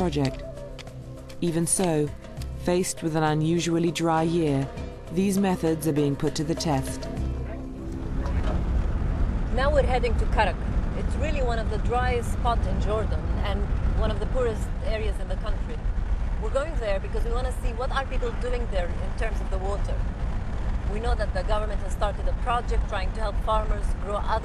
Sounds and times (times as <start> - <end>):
Speech: 0.0 - 0.4, 1.4 - 7.0, 16.4 - 20.0, 20.9 - 24.4
Music: 0.0 - 9.2
Outside, rural or natural: 0.0 - 24.4.